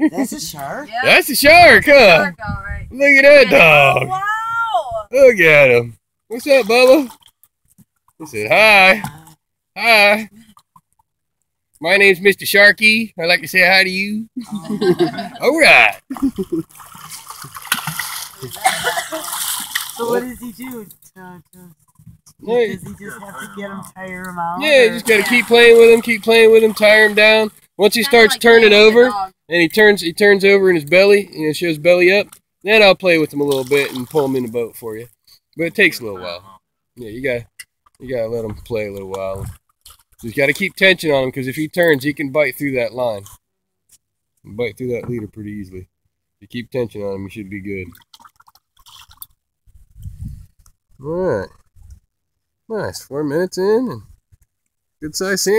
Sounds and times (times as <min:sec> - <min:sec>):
Outside, rural or natural: 0:00.0 - 0:55.5
Speech: 0:22.5 - 0:39.5, 0:44.5 - 0:47.9, 0:51.0 - 0:51.5, 0:52.7 - 0:54.0, 0:55.0 - 0:55.5.